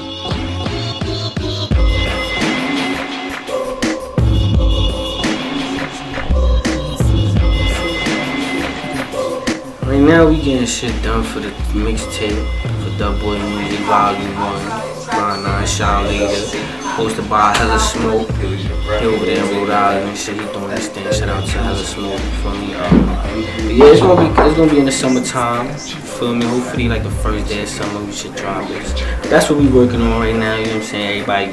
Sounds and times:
Music: 0.0 - 31.5
Speech: 9.8 - 31.5.

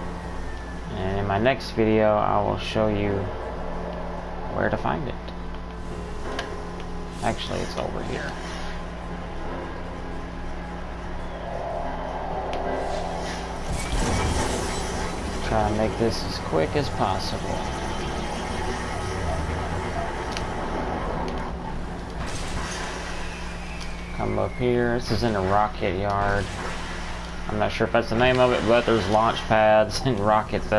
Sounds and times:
Speech: 0.9 - 3.3, 4.5 - 5.2, 7.2 - 8.4, 15.4 - 17.8, 24.2 - 26.4, 27.5 - 30.7.

